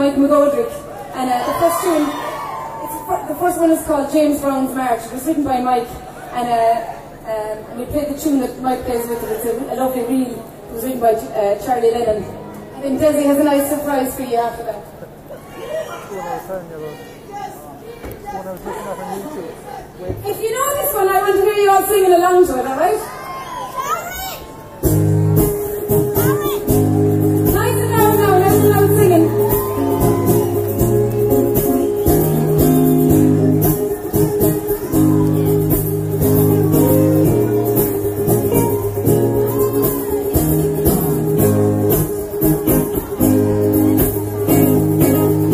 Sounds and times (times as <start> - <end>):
Musical instrument: 24.8 - 45.5.